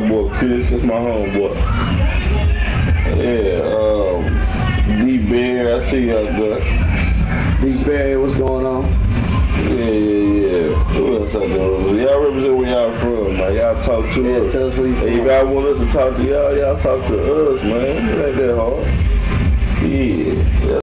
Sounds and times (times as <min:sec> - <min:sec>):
Music: 0:00.0 - 0:20.8
Speech: 0:09.6 - 0:18.9, 0:19.8 - 0:20.8.